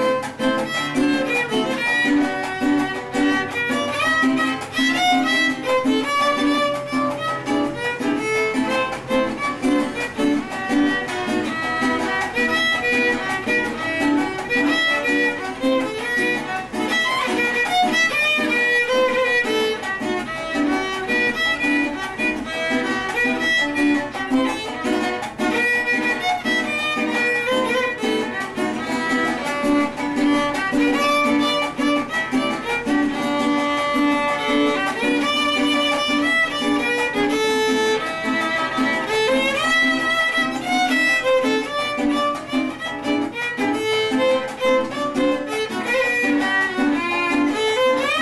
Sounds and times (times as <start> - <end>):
Violin, fiddle: 0.0 - 48.2.